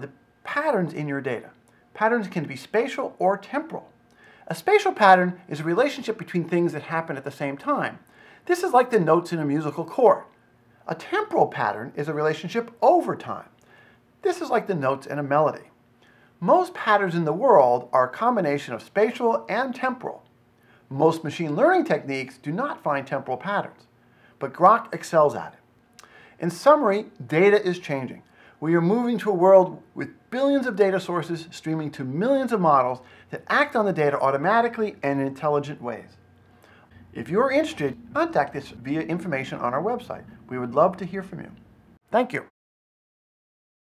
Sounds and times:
Speech: 0:00.0 - 0:03.9, 0:04.5 - 0:13.5, 0:14.2 - 0:15.8, 0:16.4 - 0:20.3, 0:20.9 - 0:25.6, 0:26.4 - 0:36.2, 0:37.1 - 0:42.5.

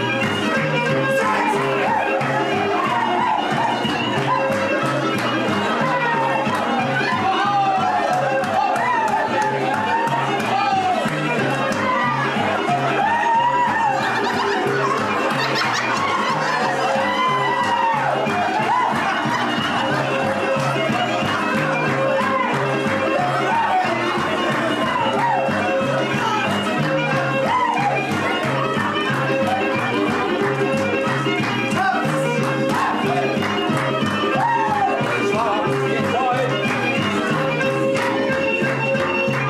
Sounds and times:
Music: 0:00.0 - 0:39.4
Laughter: 0:13.9 - 0:17.0, 0:19.0 - 0:20.2.

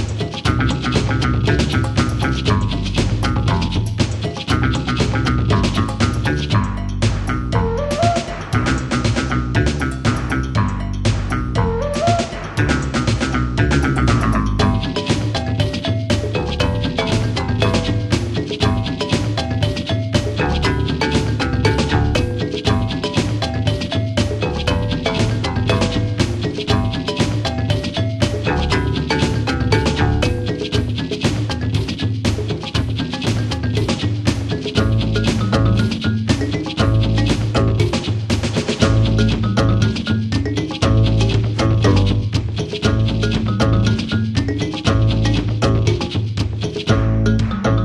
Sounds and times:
Music: 0:00.0 - 0:47.8.

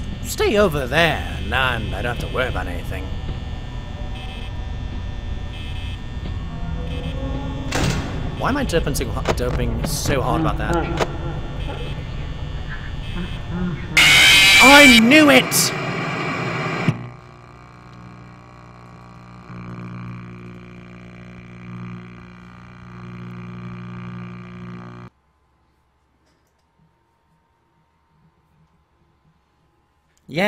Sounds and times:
Speech: 0:00.2 - 0:03.1, 0:08.4 - 0:11.0, 0:14.6 - 0:15.8.

